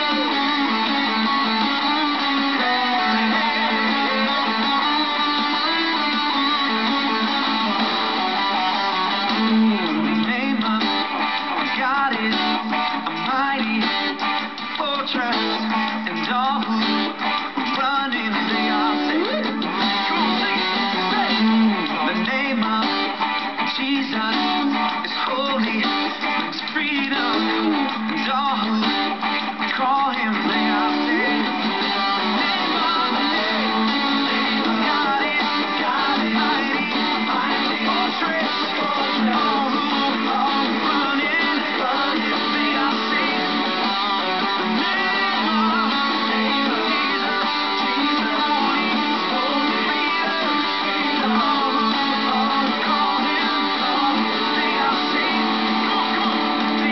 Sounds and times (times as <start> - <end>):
Electric guitar: 0.0 - 56.9.